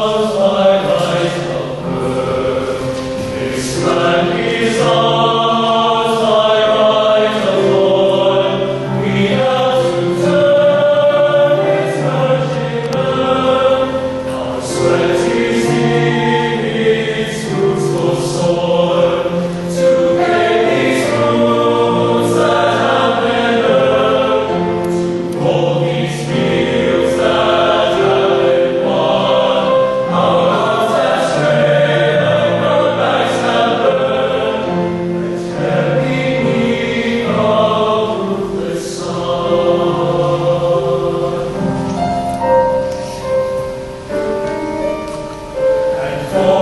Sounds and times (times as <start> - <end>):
Choir: 0.0 - 46.6.